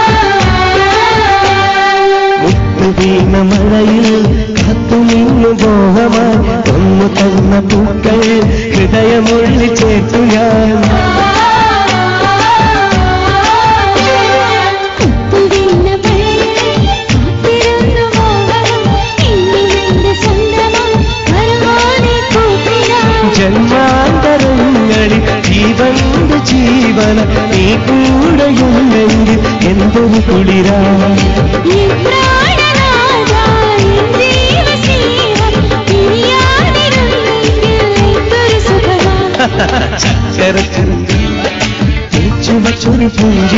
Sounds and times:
Music of Bollywood: 0.0s - 43.5s.

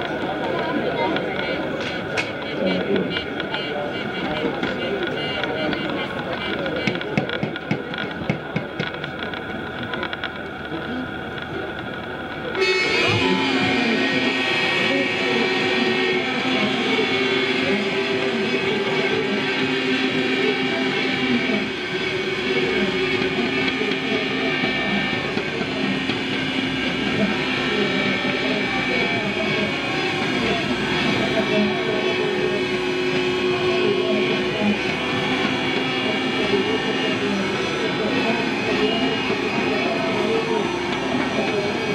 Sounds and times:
Vehicle: 0.0s - 41.9s.

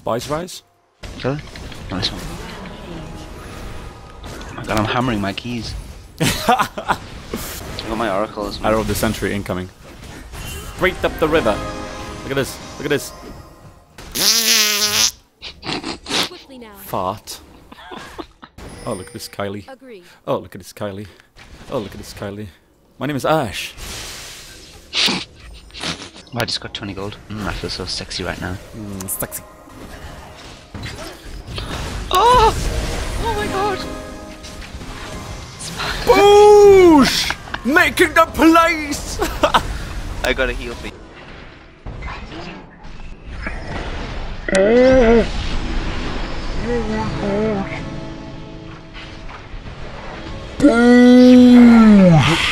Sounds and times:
Music: 11.0s - 14.0s, 33.1s - 39.9s, 46.6s - 51.7s.

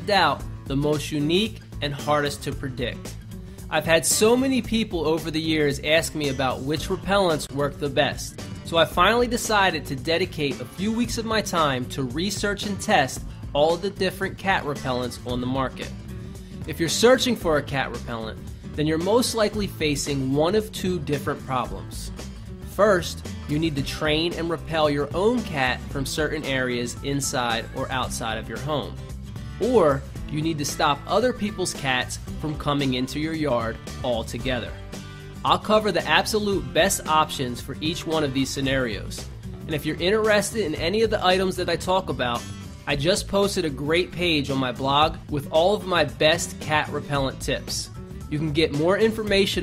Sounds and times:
Speech: 0.0s - 3.1s, 3.7s - 16.0s, 16.7s - 29.0s, 29.6s - 34.8s, 35.4s - 49.6s
Music: 0.0s - 49.6s.

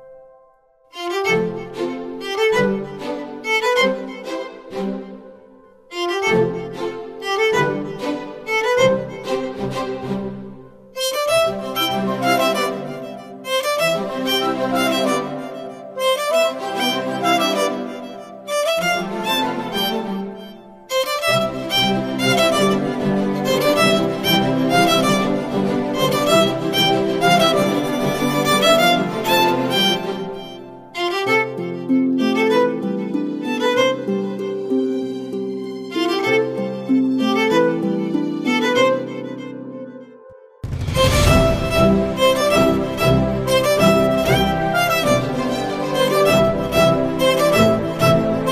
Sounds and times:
Violin, fiddle: 0.9s - 48.5s.

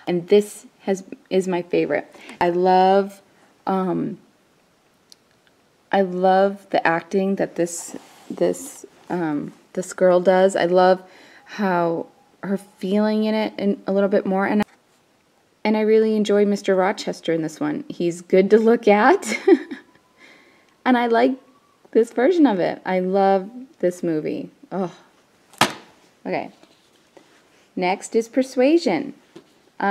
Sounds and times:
Speech: 0.1s - 4.2s, 6.0s - 14.7s, 15.7s - 19.3s, 20.9s - 25.1s, 26.2s - 26.6s, 27.8s - 29.2s.

